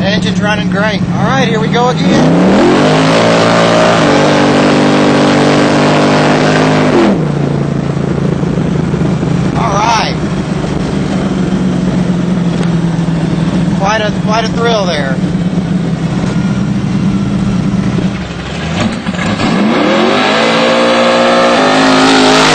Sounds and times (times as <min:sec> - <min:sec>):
Speech: 0:00.0 - 0:02.3, 0:09.6 - 0:10.2, 0:13.8 - 0:15.2
Car: 0:00.0 - 0:22.5
Outside, urban or manmade: 0:00.0 - 0:22.5.